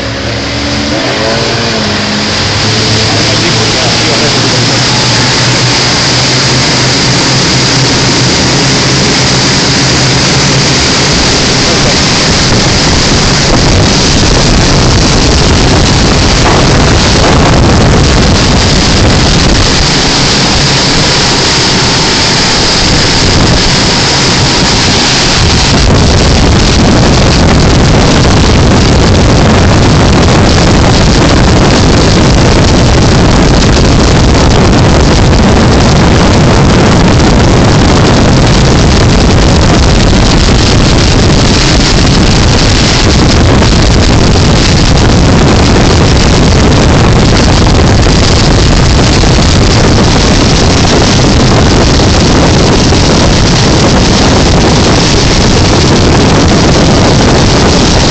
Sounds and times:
Sailboat, sailing ship: 0.0 - 58.1.

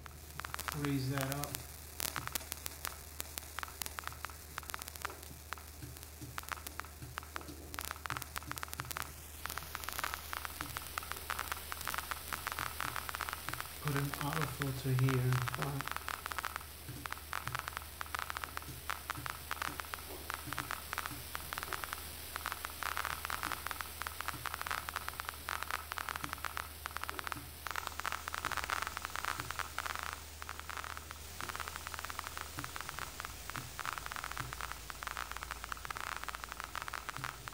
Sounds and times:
White noise: 0.0 - 37.5.

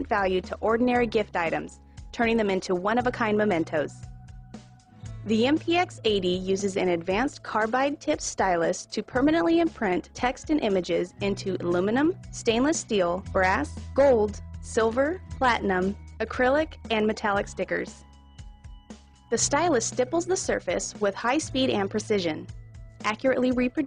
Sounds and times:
Speech: 0.0 - 4.0, 5.3 - 18.0, 19.3 - 23.8
Music: 0.0 - 23.8.

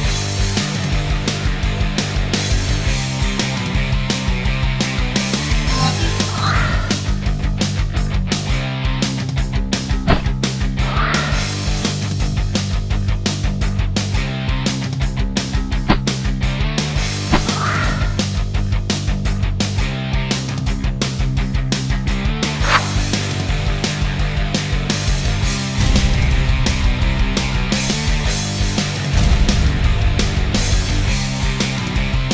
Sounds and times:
Music: 0.0 - 32.3.

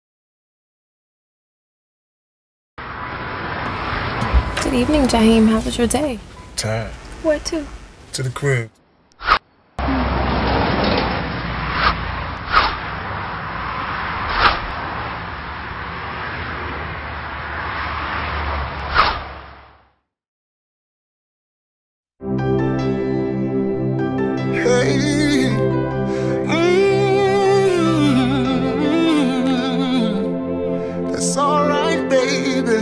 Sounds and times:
Speech: 4.6 - 8.8.

